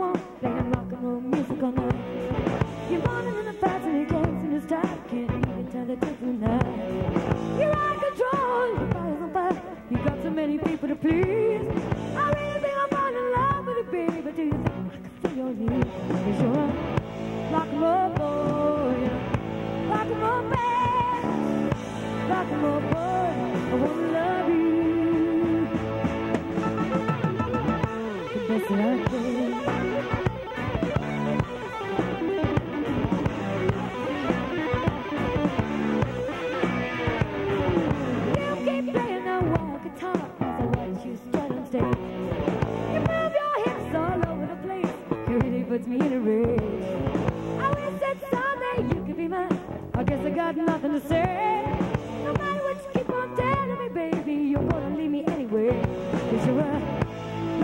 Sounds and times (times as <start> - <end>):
Rock and roll: 0.0 - 57.6.